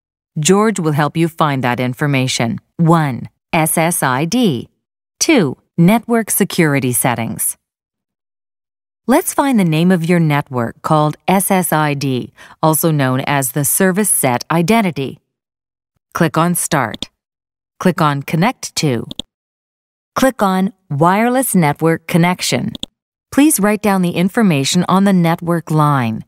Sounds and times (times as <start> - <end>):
Speech: 0.4 - 7.6, 9.1 - 15.2, 16.2 - 17.1, 17.8 - 19.2, 20.2 - 26.2.